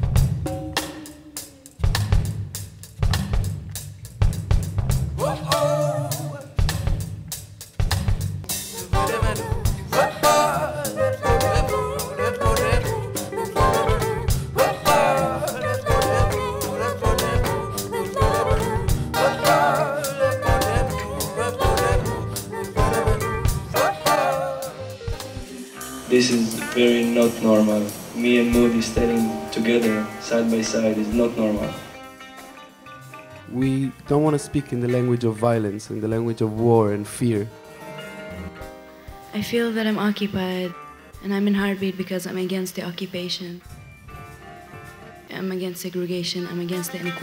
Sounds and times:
Music: 0.0 - 47.2
Speech: 26.1 - 31.8, 33.5 - 37.5, 39.4 - 43.6, 45.3 - 47.2.

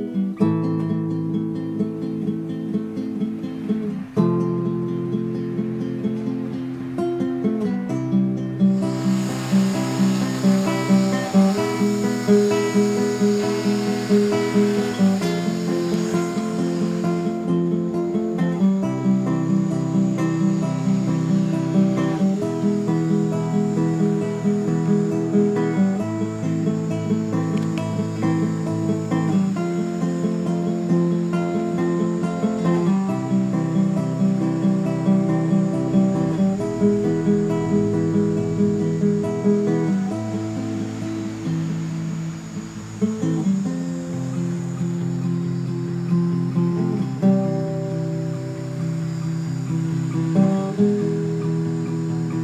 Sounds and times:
Music: 0.0 - 52.4.

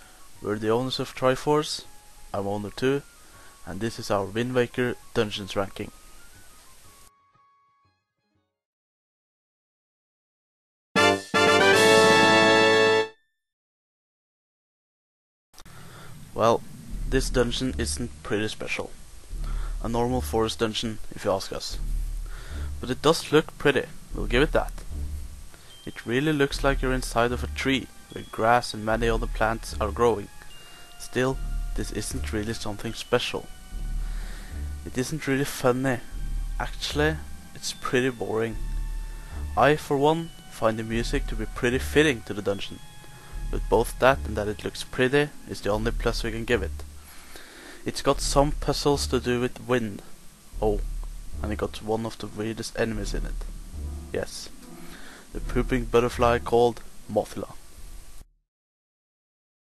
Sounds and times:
Music: 0.0 - 8.6, 11.0 - 13.4, 15.6 - 58.3
Speech: 0.4 - 3.0, 3.6 - 5.9, 16.4 - 19.0, 19.8 - 21.8, 22.8 - 24.8, 25.9 - 30.3, 31.0 - 33.5, 34.9 - 38.6, 39.6 - 42.8, 43.6 - 46.9, 47.8 - 50.8, 51.4 - 53.4, 54.2 - 54.5, 55.4 - 57.6.

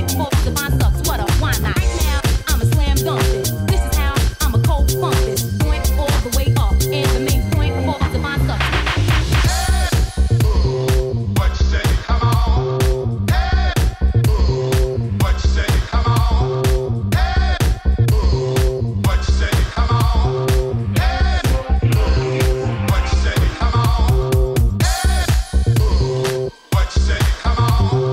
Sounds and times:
Disco: 0.0 - 28.1.

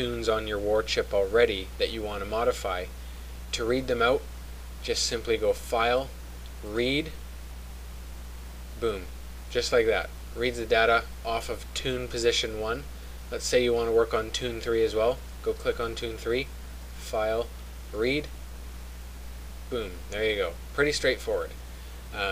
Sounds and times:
Speech: 0.0 - 2.9, 3.5 - 7.2, 8.8 - 18.4, 19.7 - 22.3.

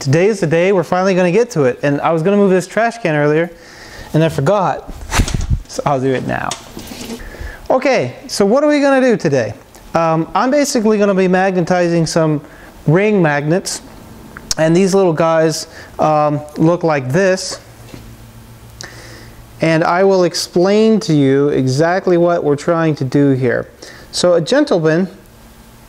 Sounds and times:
Speech: 0.0 - 4.9, 5.7 - 6.6, 7.7 - 13.8, 14.5 - 17.7, 19.6 - 25.2.

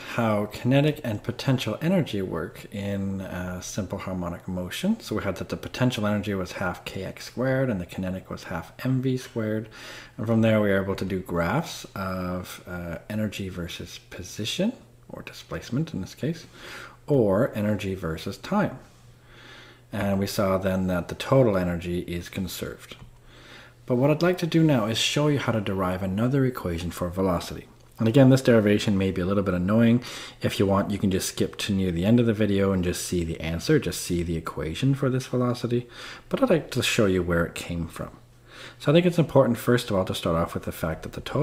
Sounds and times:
Speech: 0.0 - 16.5, 17.1 - 18.9, 19.9 - 23.1, 23.9 - 41.4.

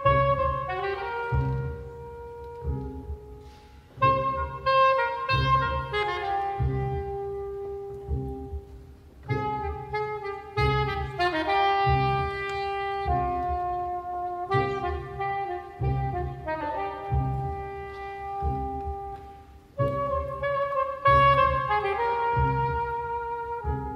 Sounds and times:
Cello: 0.0 - 23.9
Double bass: 0.0 - 23.9.

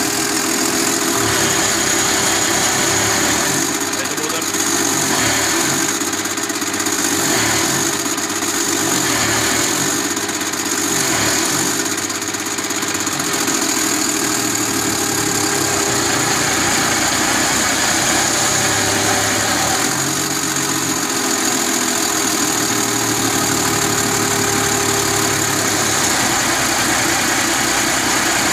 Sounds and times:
Engine: 0.0 - 28.5.

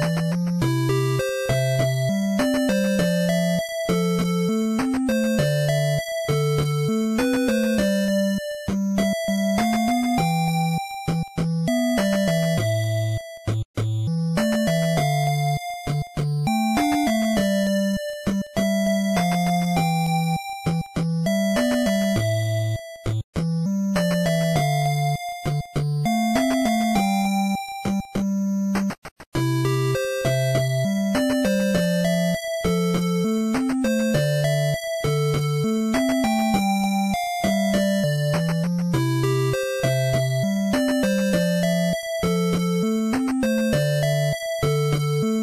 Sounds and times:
Music: 0.0 - 45.4.

